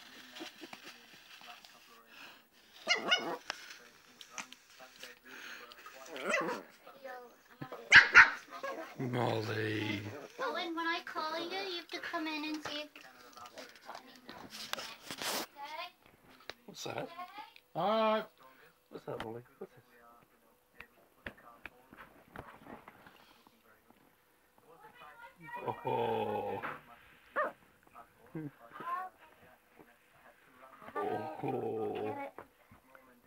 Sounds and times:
Canidae, dogs, wolves: 2.7 - 3.7, 6.0 - 6.8, 7.9 - 9.4, 25.7 - 27.7, 30.8 - 32.3
Bark: 2.8 - 3.4, 6.2 - 6.7, 7.9 - 8.9, 27.4 - 27.6.

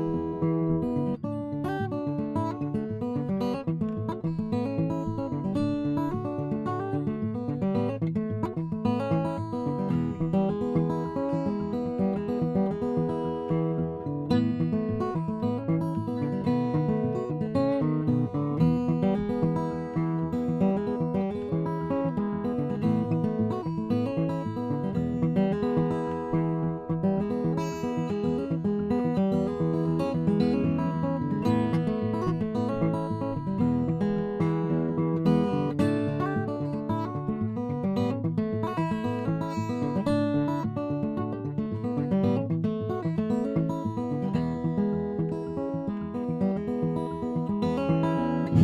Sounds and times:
Acoustic guitar: 0.0 - 48.6.

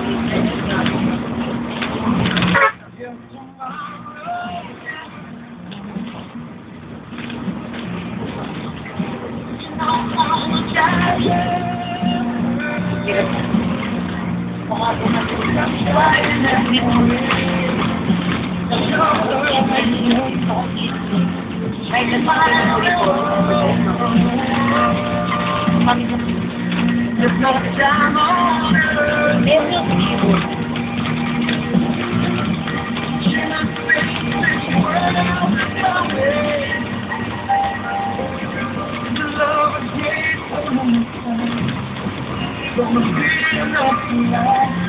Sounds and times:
Bus: 0.0 - 44.8
Music: 0.0 - 44.8.

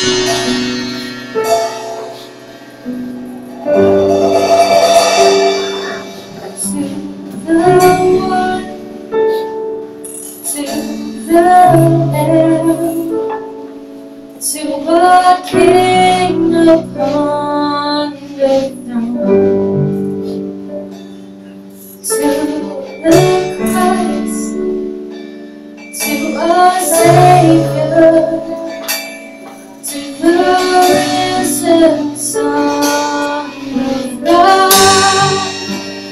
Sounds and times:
Music: 0.0 - 36.1.

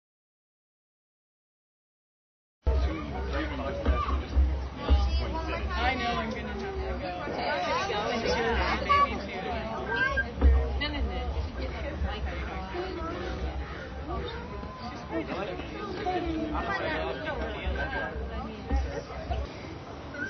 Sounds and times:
Chatter: 2.7 - 20.2
Speech: 2.7 - 20.2.

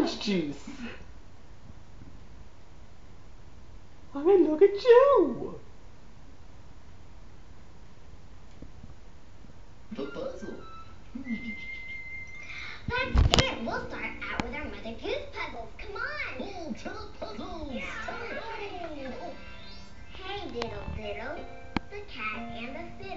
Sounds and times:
Speech: 0.0 - 0.7, 4.1 - 5.6.

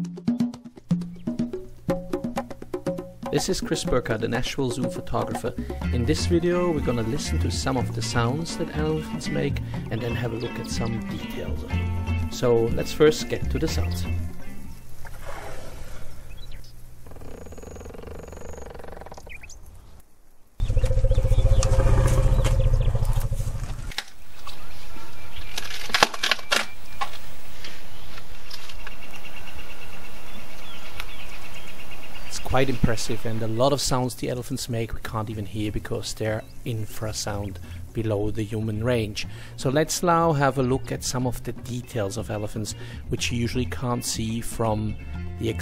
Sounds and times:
Music: 0.0 - 15.0, 35.4 - 45.6
Speech: 3.3 - 11.7, 12.3 - 14.2, 32.3 - 45.6
Wild animals: 15.1 - 16.4, 17.0 - 19.5, 20.6 - 25.2.

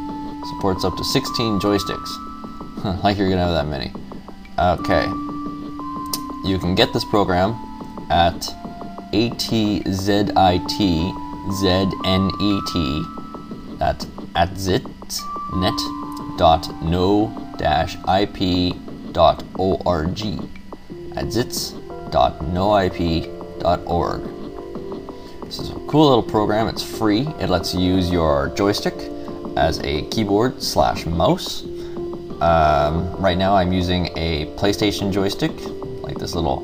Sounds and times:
Music: 0.0 - 36.6
Speech: 0.4 - 2.2, 2.8 - 4.0, 4.6 - 5.2, 6.4 - 8.6, 9.2 - 13.1, 13.8 - 20.5, 21.2 - 24.3, 25.5 - 31.7, 32.4 - 36.6.

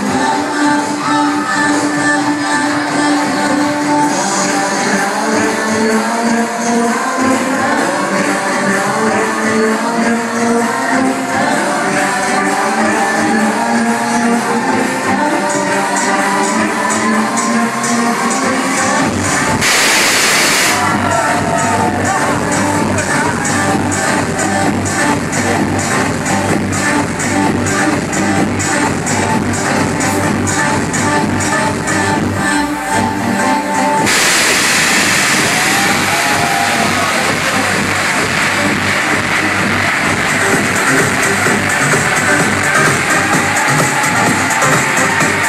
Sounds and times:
Music: 0.0 - 45.4.

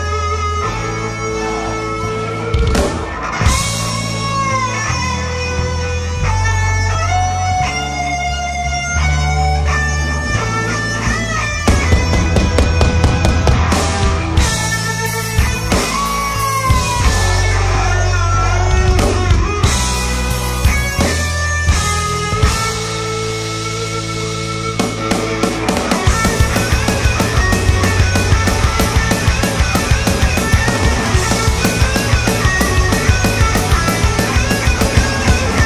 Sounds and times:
Music: 0.0 - 35.6.

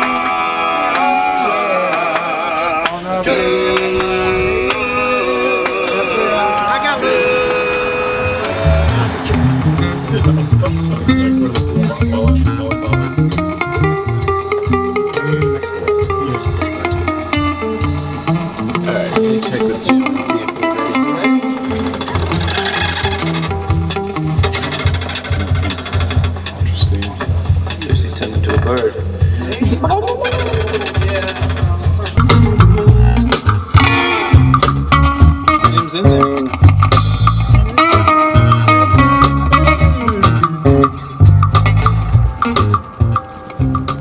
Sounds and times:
Music: 0.0 - 44.0
Speech: 8.9 - 13.1, 15.2 - 16.4, 18.8 - 21.4, 26.6 - 32.2, 35.7 - 36.3.

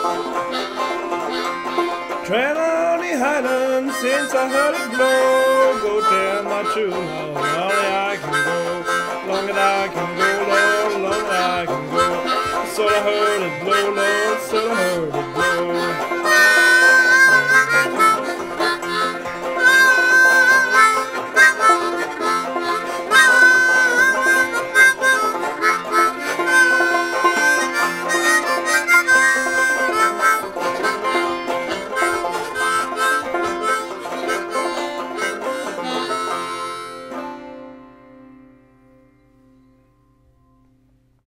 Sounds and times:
Banjo: 0.0 - 38.6.

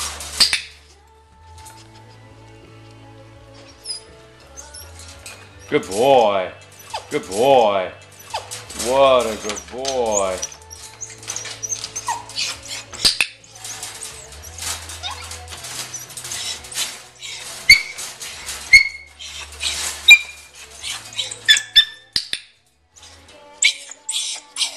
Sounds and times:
Whimper (dog): 9.4 - 12.9, 14.4 - 15.3, 18.7 - 22.0, 23.6 - 24.7.

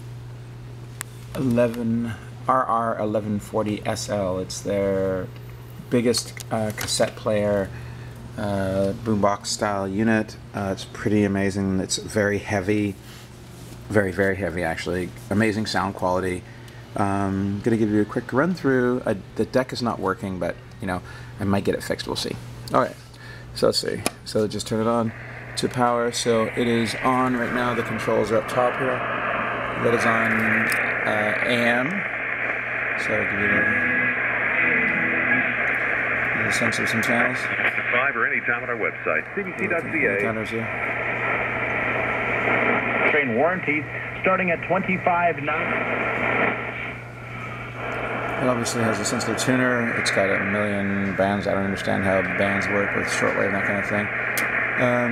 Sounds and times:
Speech: 1.3 - 7.7, 8.4 - 13.0, 13.9 - 23.0, 23.6 - 29.0, 29.8 - 32.1, 33.0 - 33.8, 36.4 - 40.8, 43.0 - 45.8, 48.4 - 54.2, 54.8 - 55.1
Radio: 23.8 - 55.1.

